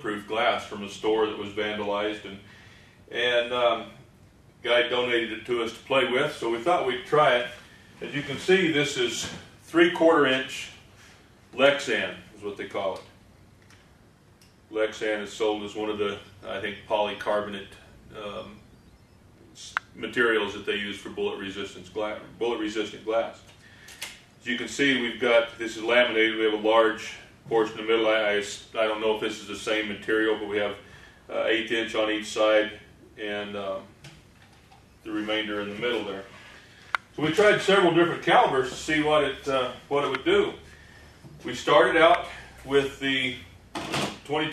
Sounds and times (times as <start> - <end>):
Speech: 0.0 - 2.5, 3.1 - 4.0, 4.6 - 10.8, 11.5 - 13.1, 14.7 - 18.6, 19.5 - 23.5, 24.4 - 34.0, 35.0 - 36.3, 37.2 - 40.7, 41.4 - 43.5, 44.1 - 44.5.